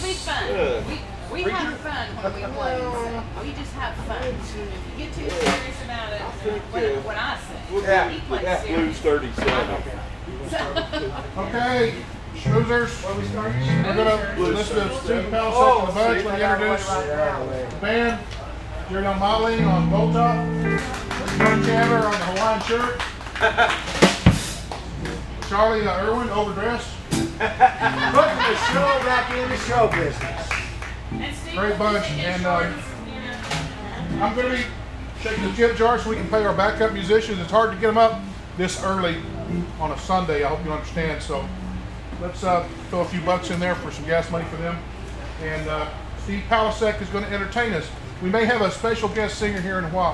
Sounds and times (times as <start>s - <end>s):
Steel guitar, slide guitar: 12.4s - 14.8s, 19.6s - 22.3s, 27.2s - 28.8s, 31.1s - 34.7s, 38.0s - 39.8s.